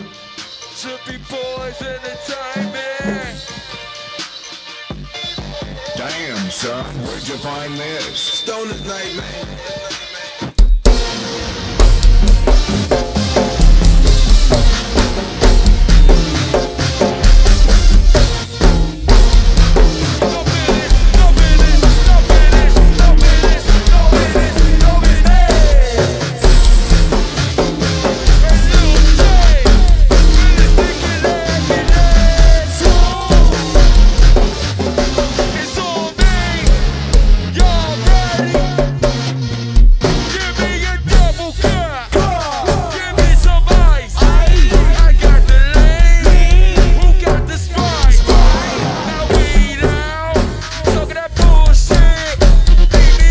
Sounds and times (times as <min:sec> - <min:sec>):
Drum kit: 0:00.0 - 0:53.3
Speech: 0:06.0 - 0:09.4
Drum roll: 0:10.6 - 0:53.3.